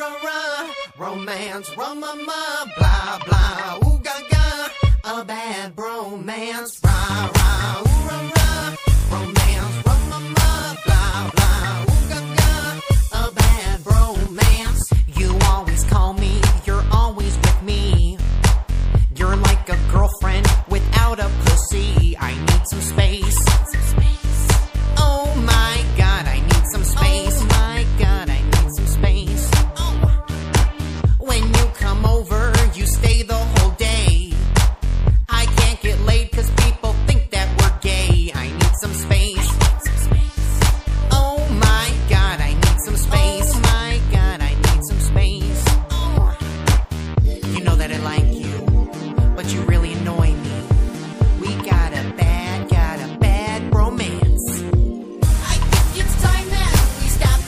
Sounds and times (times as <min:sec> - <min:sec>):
Rhythm and blues: 0:00.0 - 0:57.4.